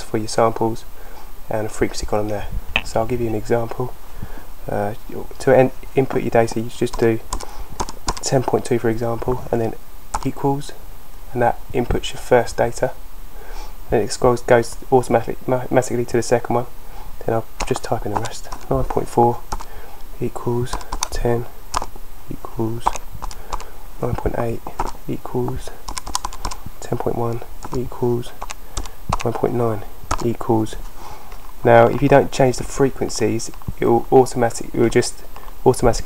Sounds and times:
Typing: 0:06.9 - 0:08.4, 0:17.6 - 0:19.7, 0:20.7 - 0:21.9, 0:22.9 - 0:23.7, 0:24.8 - 0:26.6, 0:27.6 - 0:27.8, 0:28.4 - 0:29.4, 0:30.1 - 0:30.3.

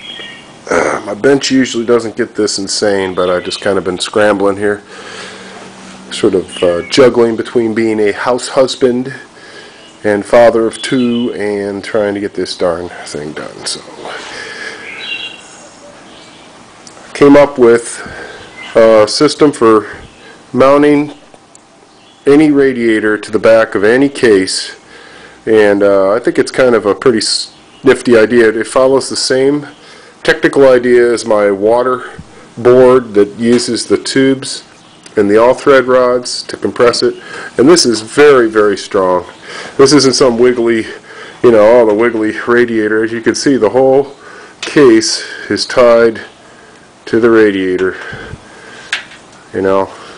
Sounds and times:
Speech: 0:00.7 - 0:04.9, 0:06.1 - 0:09.3, 0:10.0 - 0:14.3, 0:17.1 - 0:18.2, 0:18.8 - 0:21.2, 0:22.2 - 0:24.8, 0:25.4 - 0:46.4, 0:47.0 - 0:48.2, 0:49.5 - 0:50.0.

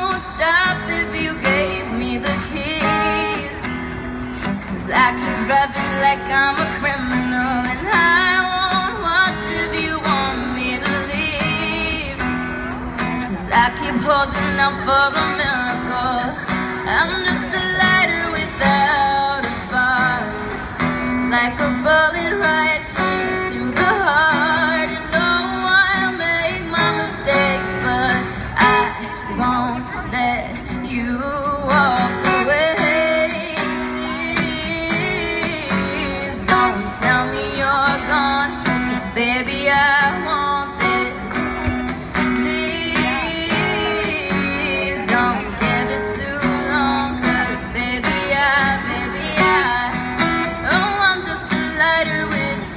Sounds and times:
Female singing: 0:00.0 - 0:03.7, 0:04.7 - 0:12.3, 0:13.3 - 0:20.4, 0:21.2 - 0:41.6, 0:42.2 - 0:52.7
Music: 0:31.4 - 0:52.7.

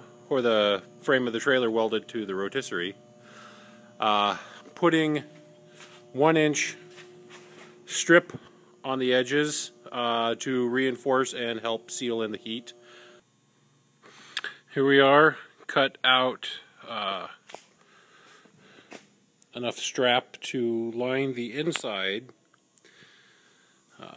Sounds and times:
Speech: 0:00.3 - 0:03.0, 0:04.0 - 0:05.3, 0:06.2 - 0:06.8, 0:07.9 - 0:12.8, 0:14.7 - 0:17.4, 0:19.5 - 0:22.4.

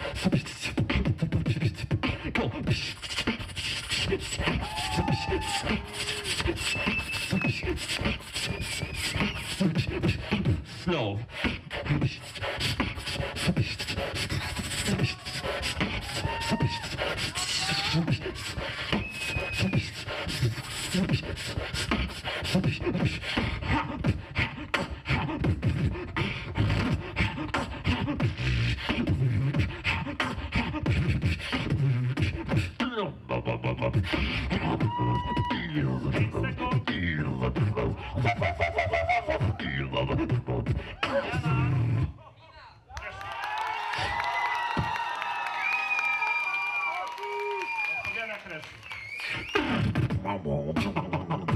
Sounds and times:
Beatboxing: 0:00.0 - 0:42.2, 0:44.0 - 0:45.1, 0:47.5 - 0:51.5.

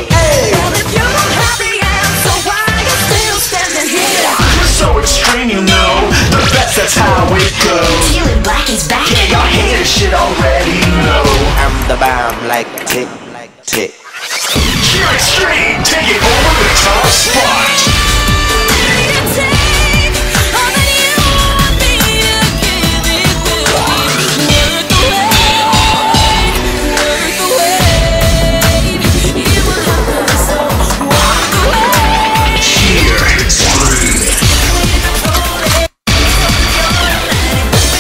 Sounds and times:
Disco: 0:00.0 - 0:13.1, 0:14.6 - 0:38.0
Pop music: 0:00.0 - 0:38.0
Rhythm and blues: 0:00.0 - 0:38.0.

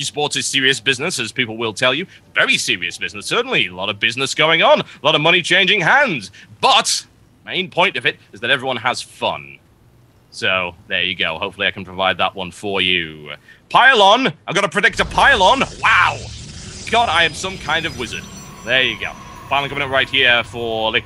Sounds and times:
Speech: 0:00.0 - 0:09.6, 0:10.3 - 0:16.3, 0:16.9 - 0:21.0.

